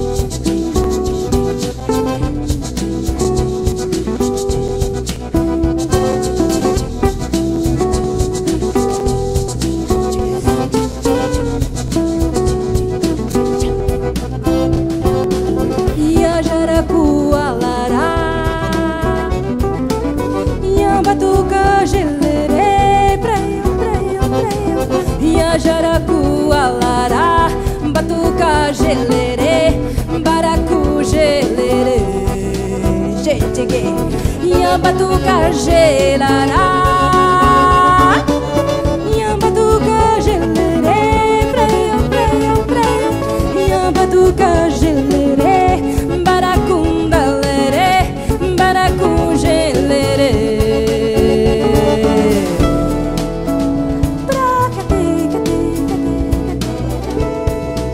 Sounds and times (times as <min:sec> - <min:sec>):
Music: 0:00.0 - 0:57.9.